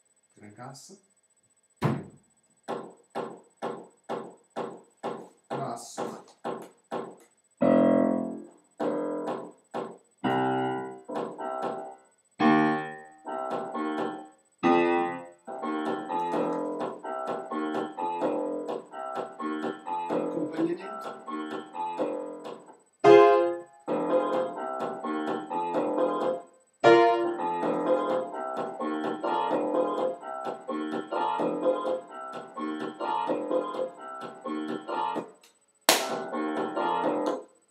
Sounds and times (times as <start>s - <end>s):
Techno: 15.5s - 22.7s, 23.8s - 35.3s.